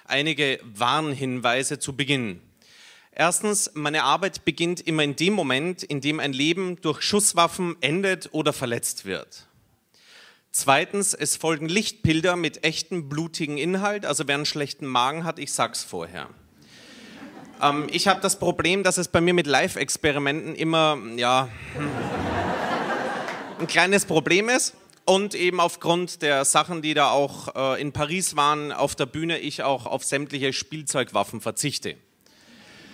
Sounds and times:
Speech: 0.1s - 2.4s, 3.2s - 9.5s, 10.5s - 16.4s, 17.6s - 21.6s, 23.6s - 32.0s.

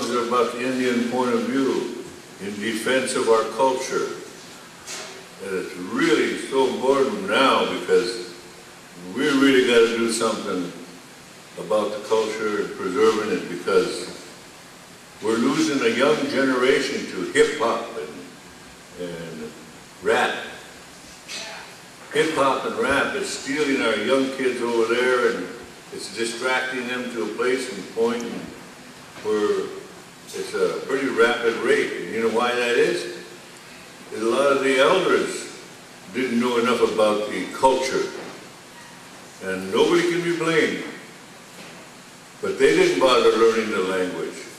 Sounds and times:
Speech: 0.0s - 4.3s, 4.9s - 8.4s, 9.0s - 10.9s, 11.6s - 14.2s, 15.2s - 18.3s, 19.0s - 20.6s, 21.3s - 28.6s, 29.2s - 33.3s, 34.1s - 38.4s, 39.4s - 41.0s, 42.4s - 44.5s.

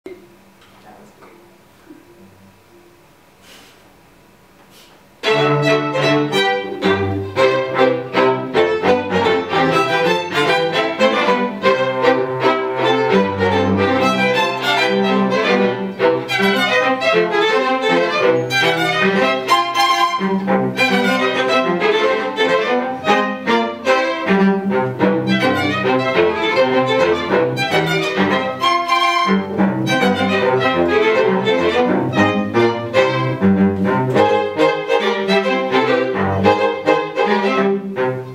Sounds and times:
Speech: 0.7s - 1.4s
Cello: 5.2s - 38.3s
Classical music: 5.2s - 38.3s
Violin, fiddle: 5.2s - 38.3s.

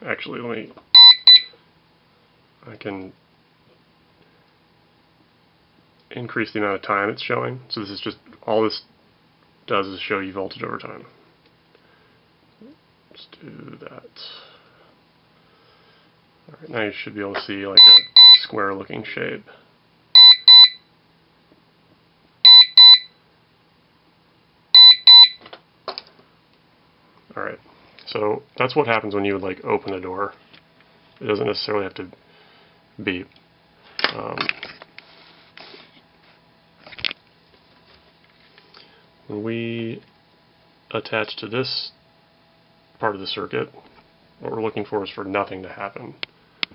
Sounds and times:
Speech: 0.0s - 0.8s, 2.6s - 3.2s, 6.1s - 8.9s, 9.7s - 11.2s, 12.6s - 14.5s, 16.5s - 19.6s, 27.3s - 30.4s, 31.2s - 32.2s, 33.0s - 33.4s, 34.1s - 34.5s, 39.3s - 40.1s, 40.9s - 42.0s, 43.0s - 46.2s
Inside, small room: 0.0s - 46.7s
Alarm: 1.0s - 1.6s, 17.8s - 18.5s, 20.2s - 20.9s, 22.4s - 23.2s, 24.8s - 25.4s.

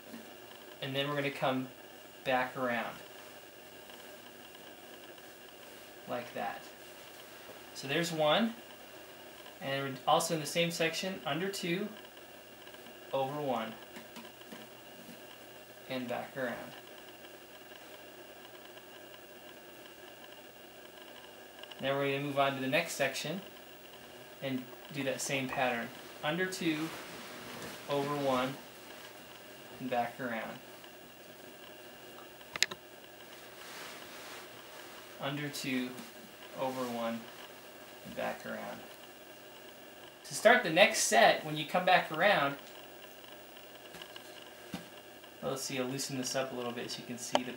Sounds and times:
Inside, small room: 0.0s - 47.5s
Speech: 0.8s - 3.0s, 6.1s - 6.8s, 7.8s - 8.6s, 9.6s - 12.0s, 13.1s - 13.8s, 15.9s - 16.8s, 21.8s - 23.5s, 24.4s - 27.0s, 27.9s - 28.6s, 29.8s - 30.6s, 35.2s - 37.3s, 38.0s - 38.9s, 40.2s - 42.6s, 45.4s - 47.5s.

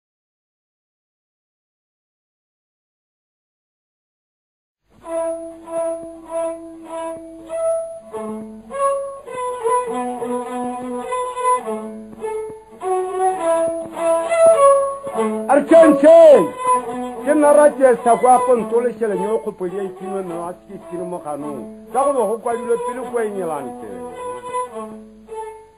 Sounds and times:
Music: 4.8s - 25.7s.

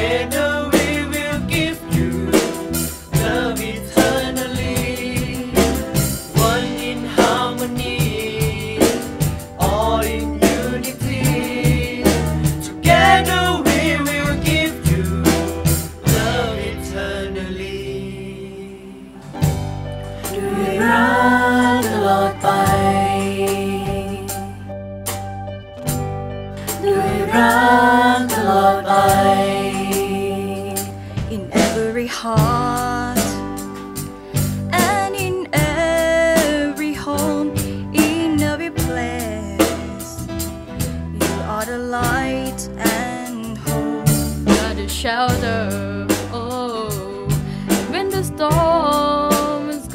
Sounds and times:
Vocal music: 0.0s - 24.9s, 26.4s - 49.9s.

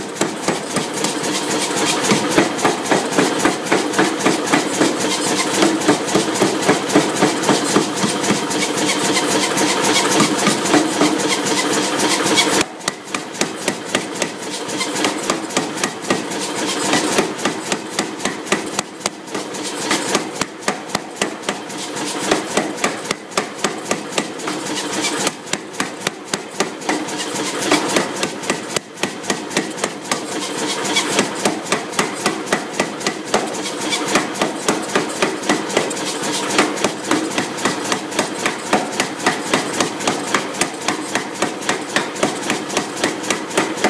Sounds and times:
Tools: 0.0s - 43.9s.

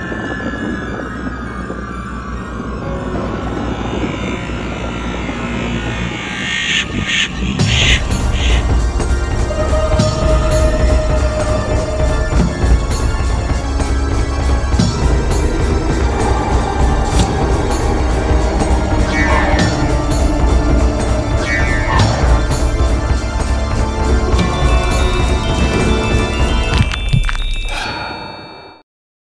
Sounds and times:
Music: 0.0s - 28.8s.

